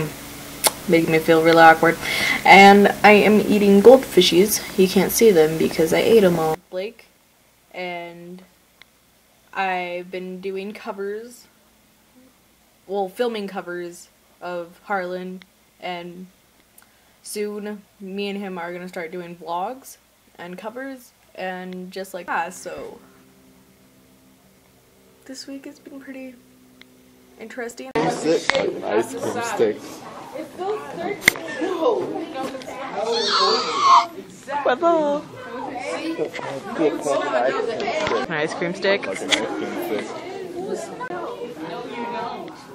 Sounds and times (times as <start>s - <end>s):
Crying, sobbing: 32.9s - 34.2s.